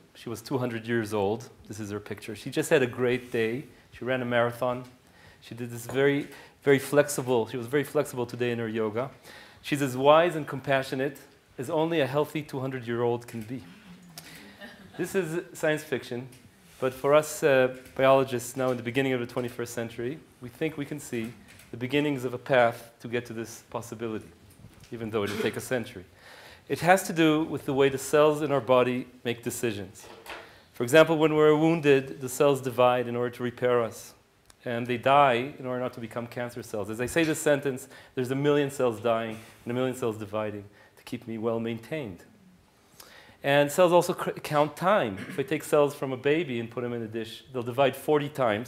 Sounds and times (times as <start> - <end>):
Speech: 0.0 - 13.9, 15.0 - 26.1, 26.7 - 30.1, 30.8 - 42.3, 43.4 - 48.6.